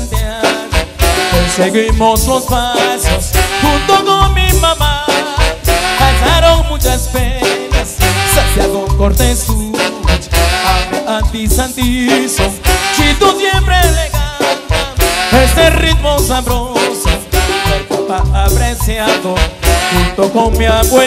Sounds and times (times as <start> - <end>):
Brass instrument: 0.0 - 21.0
Marimba, xylophone: 0.0 - 21.0
Orchestra: 0.0 - 21.0.